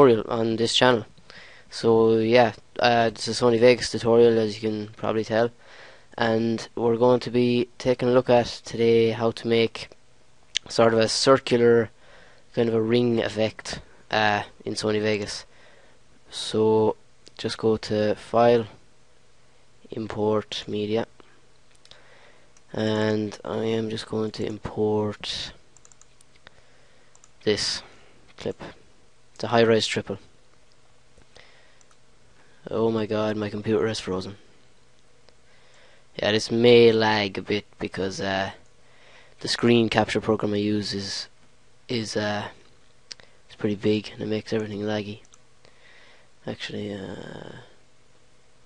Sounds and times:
Speech: 0.0s - 1.1s, 1.7s - 5.6s, 6.2s - 10.0s, 10.6s - 11.9s, 12.5s - 15.5s, 16.3s - 18.8s, 19.9s - 21.1s, 22.7s - 25.6s, 27.4s - 28.8s, 29.4s - 30.3s, 32.6s - 34.4s, 36.2s - 38.6s, 39.4s - 42.7s, 43.5s - 45.3s, 46.4s - 47.8s.

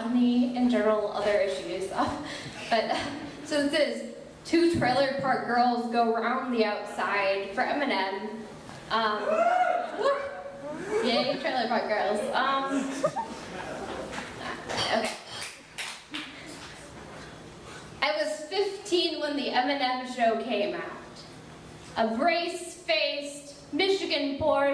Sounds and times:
Speech: 0.0s - 9.3s, 10.8s - 13.9s.

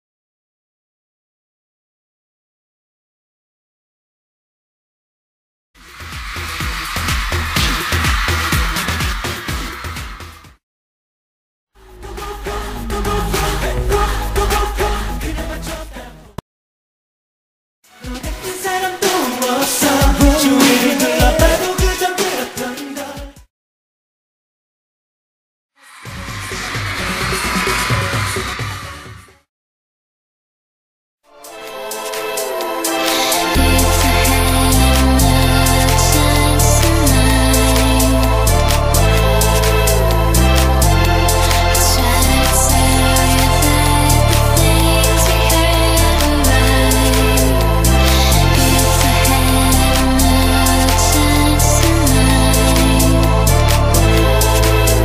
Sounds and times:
Pop music: 5.9s - 10.6s, 11.8s - 16.4s, 17.9s - 23.5s, 31.4s - 55.0s
Singing: 11.9s - 16.4s, 17.9s - 23.5s, 31.5s - 55.0s.

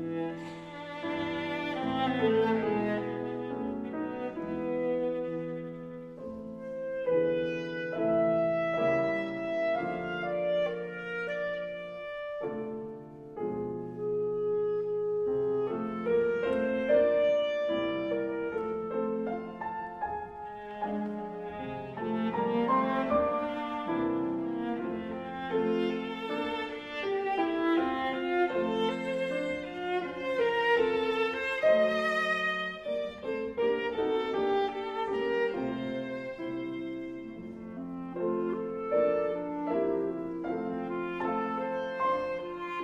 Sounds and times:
Clarinet: 0.0s - 42.8s.

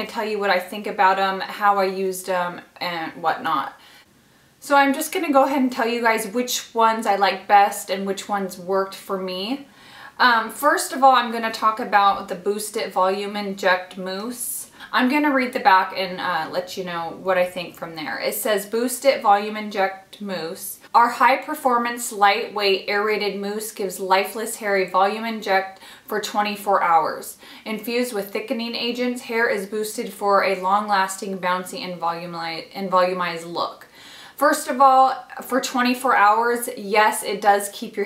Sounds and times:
Speech: 0.0s - 3.8s, 4.6s - 38.0s.

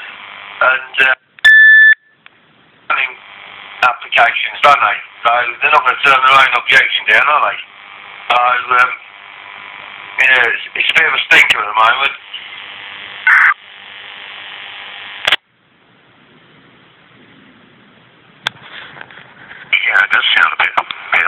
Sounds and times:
Speech: 0.6s - 1.2s, 2.9s - 3.2s, 3.8s - 7.7s, 8.3s - 9.0s, 10.2s - 12.6s, 19.8s - 21.2s.

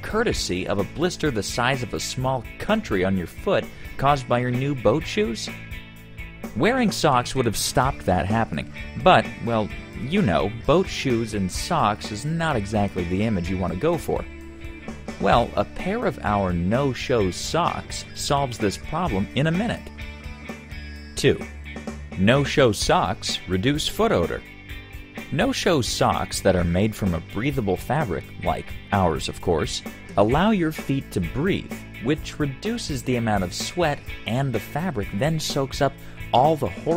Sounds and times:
Speech: 0.0s - 5.6s, 6.6s - 14.2s, 15.2s - 19.9s, 21.2s - 21.5s, 22.2s - 24.4s, 25.3s - 36.9s
Music: 0.0s - 36.9s.

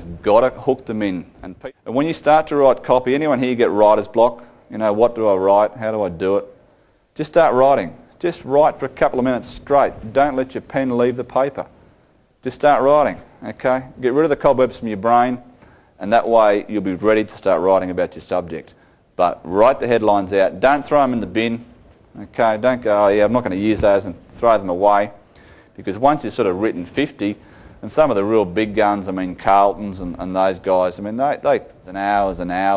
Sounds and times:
Speech: 0.0s - 6.6s, 7.2s - 11.7s, 12.4s - 25.2s, 25.8s - 32.7s.

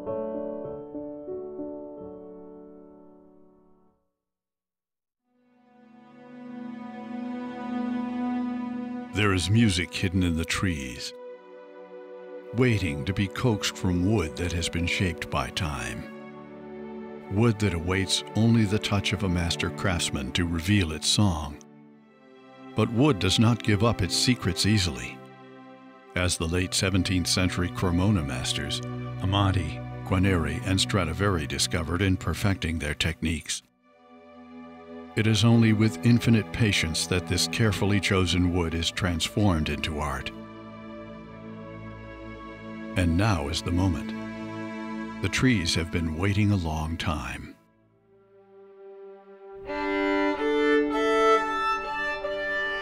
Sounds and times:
Music: 0.0s - 4.3s, 5.2s - 52.8s
Speech: 9.2s - 11.2s, 12.5s - 16.1s, 17.3s - 21.6s, 22.8s - 25.2s, 26.2s - 33.7s, 35.2s - 40.4s, 43.0s - 44.2s, 45.2s - 47.6s.

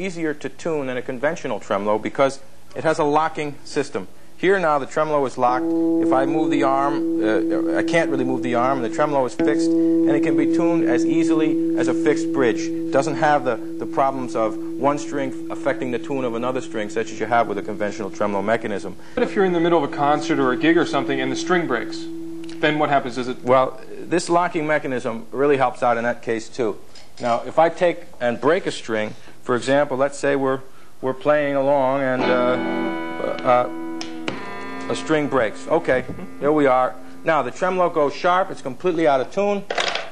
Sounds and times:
Speech: 0.0s - 32.6s, 33.2s - 33.7s, 34.9s - 39.8s.

